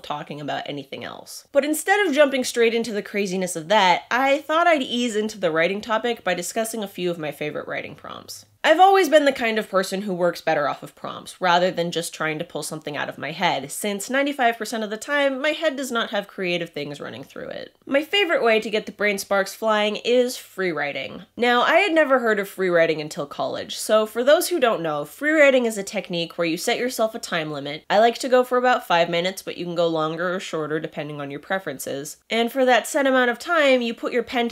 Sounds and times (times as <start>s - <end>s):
Speech: 0.0s - 34.5s.